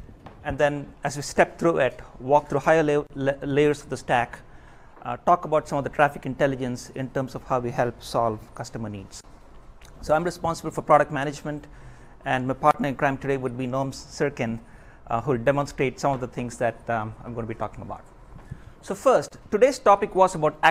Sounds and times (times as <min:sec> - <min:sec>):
Speech: 0:00.4 - 0:04.4, 0:05.0 - 0:09.2, 0:10.0 - 0:18.1, 0:18.8 - 0:20.7.